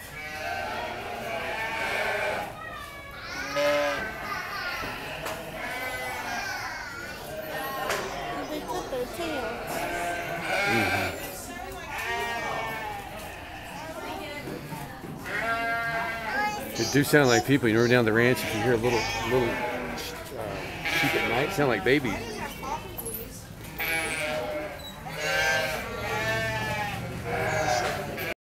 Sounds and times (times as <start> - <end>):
Bleat: 0.0 - 8.6, 9.3 - 14.1, 15.2 - 17.4, 18.3 - 23.0, 23.8 - 28.4.